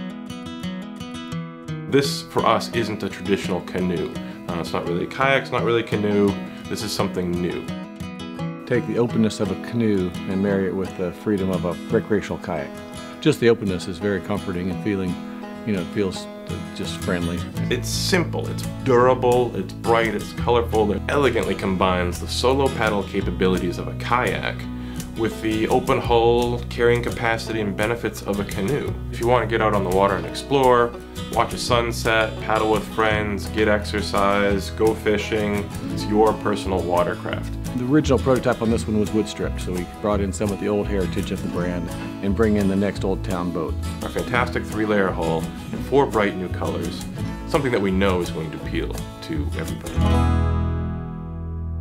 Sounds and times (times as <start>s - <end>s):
Music: 0.0s - 51.8s
Speech: 1.9s - 7.8s, 8.7s - 50.0s.